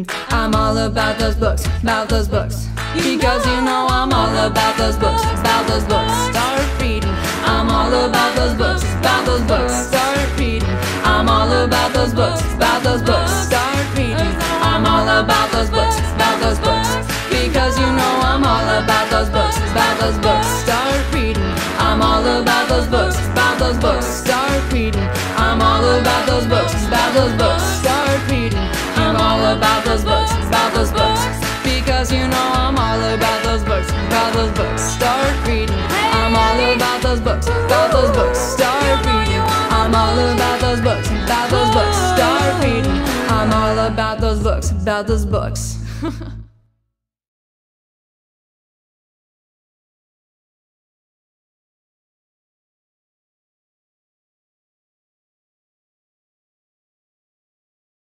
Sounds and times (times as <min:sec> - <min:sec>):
Singing: 0:00.3 - 0:44.2.